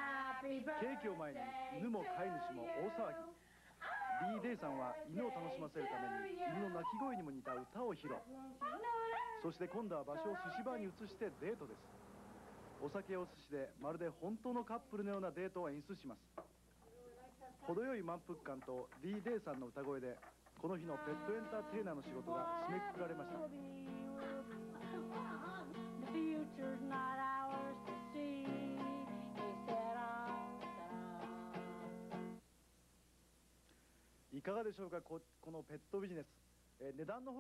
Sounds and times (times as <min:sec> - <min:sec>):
Female singing: 0:00.0 - 0:07.0, 0:20.8 - 0:31.8
Speech: 0:00.8 - 0:11.9, 0:12.8 - 0:23.5, 0:34.3 - 0:37.4
Bow-wow: 0:06.8 - 0:08.3.